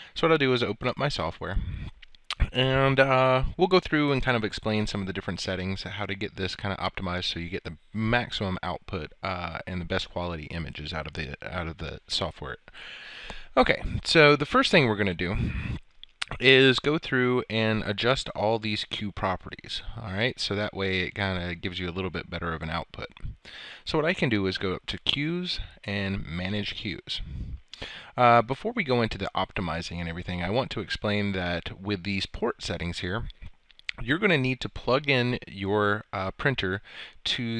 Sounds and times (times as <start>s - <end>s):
Speech: 0.2s - 12.6s, 13.6s - 15.5s, 16.2s - 27.4s, 28.2s - 37.5s.